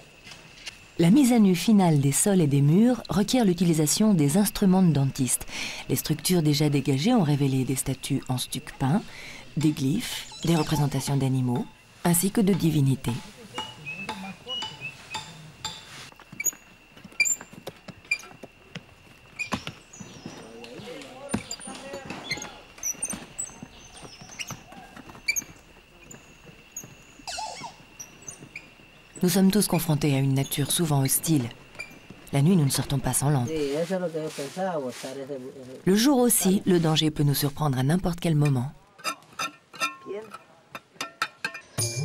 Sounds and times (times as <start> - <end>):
Outside, rural or natural: 0.0 - 42.0
Speech: 9.6 - 14.7, 20.4 - 22.6, 29.2 - 31.6, 32.3 - 38.8.